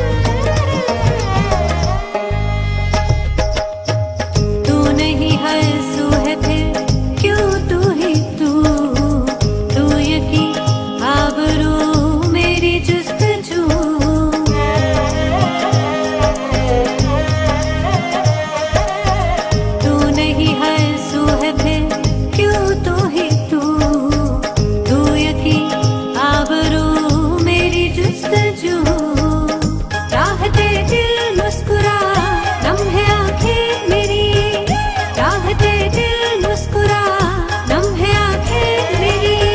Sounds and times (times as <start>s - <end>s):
Music of Bollywood: 0.0s - 39.5s.